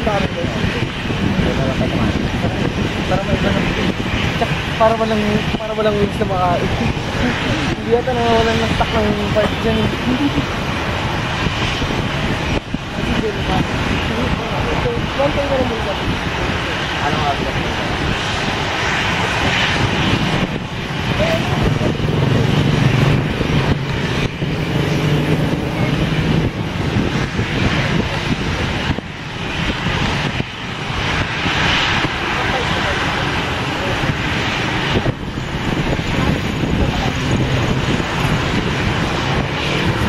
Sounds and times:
Aircraft engine: 0:00.0 - 0:40.0
Fixed-wing aircraft, airplane: 0:00.0 - 0:40.0
Outside, urban or manmade: 0:00.0 - 0:40.0.

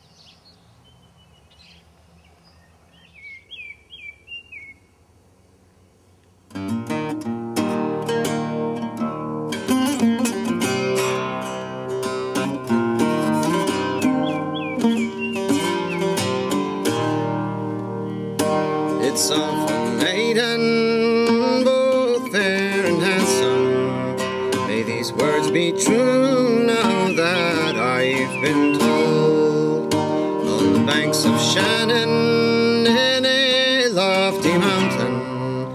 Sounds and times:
Music: 0:06.5 - 0:35.7.

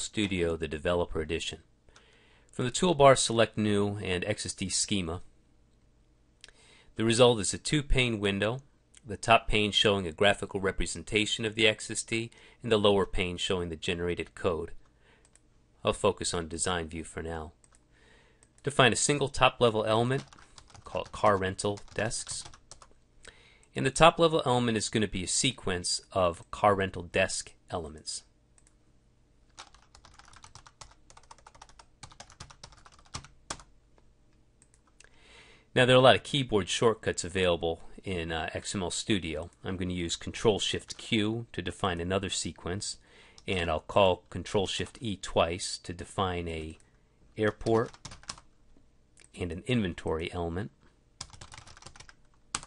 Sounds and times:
Speech: 0:00.0 - 0:01.7, 0:02.6 - 0:05.3, 0:07.0 - 0:14.8, 0:15.8 - 0:17.6, 0:18.6 - 0:22.6, 0:23.7 - 0:28.3, 0:35.8 - 0:46.8, 0:47.4 - 0:48.0, 0:49.2 - 0:50.8.

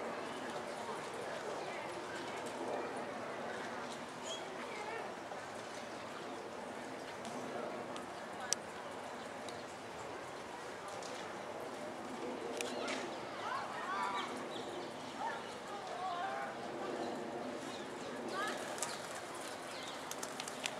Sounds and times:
Speech: 0:00.0 - 0:20.7.

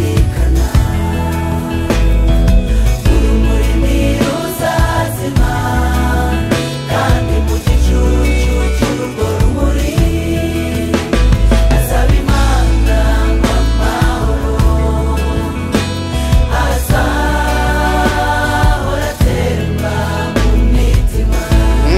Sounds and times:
Christian music: 0:00.0 - 0:21.9.

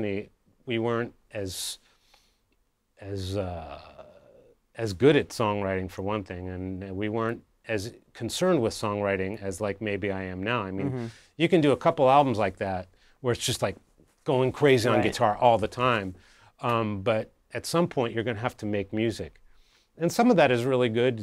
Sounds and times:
Speech: 0:00.0 - 0:01.8, 0:03.0 - 0:04.2, 0:04.8 - 0:19.4, 0:20.0 - 0:21.2.

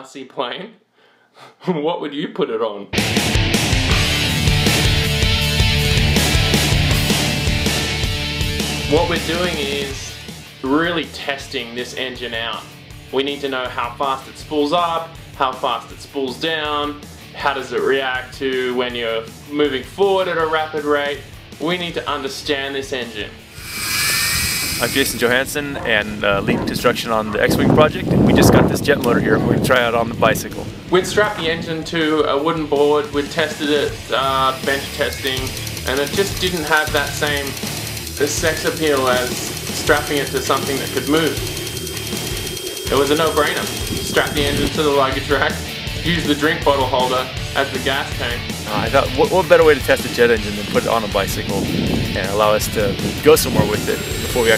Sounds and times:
Speech: 0:00.0 - 0:00.8, 0:01.6 - 0:03.0, 0:08.9 - 0:23.4, 0:24.9 - 0:37.6, 0:38.2 - 0:41.4, 0:42.9 - 0:54.5
Music: 0:02.9 - 0:54.5.

